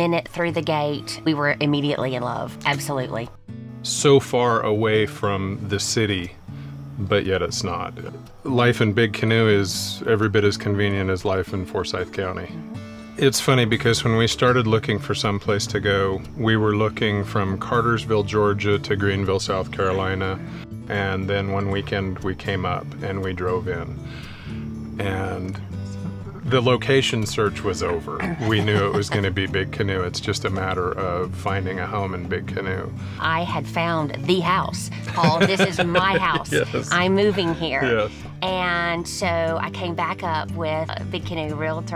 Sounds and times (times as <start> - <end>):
Speech: 0.0 - 3.3, 3.9 - 6.3, 7.0 - 12.5, 13.2 - 23.9, 25.0 - 25.6, 26.4 - 41.9
Music: 0.0 - 41.9.